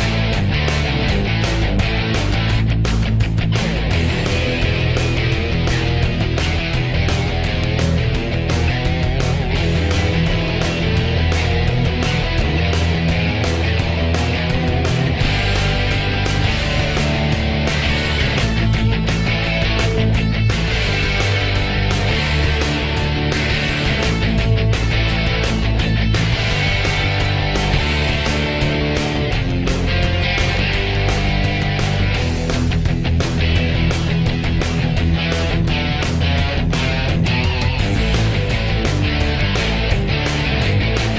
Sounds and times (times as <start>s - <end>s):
Music: 0.0s - 41.1s.